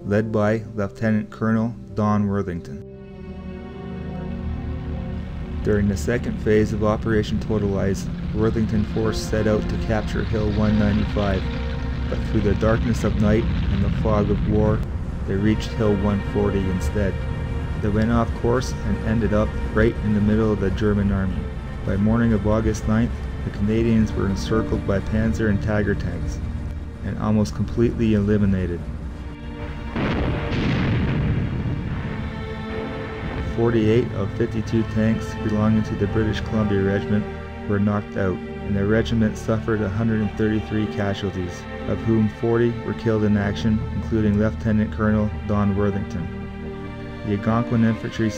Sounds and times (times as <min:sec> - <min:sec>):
Speech: 0:00.0 - 0:02.8, 0:05.6 - 0:11.5, 0:12.1 - 0:17.2, 0:17.8 - 0:26.4, 0:27.0 - 0:28.8, 0:33.5 - 0:46.3, 0:47.3 - 0:48.3
Music: 0:00.0 - 0:48.3.